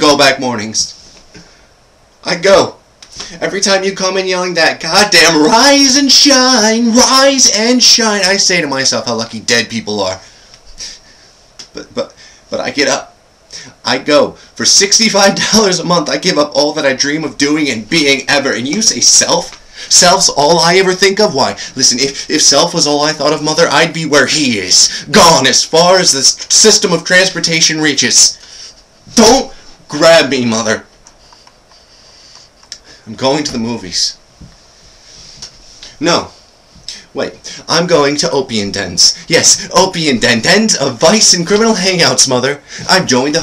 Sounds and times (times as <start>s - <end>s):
Narration, monologue: 0.0s - 43.4s.